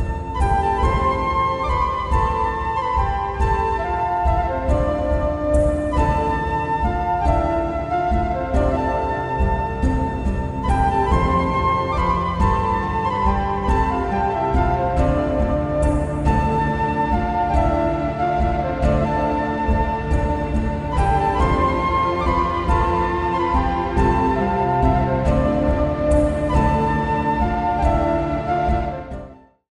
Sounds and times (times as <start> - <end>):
Music: 0.0 - 29.7.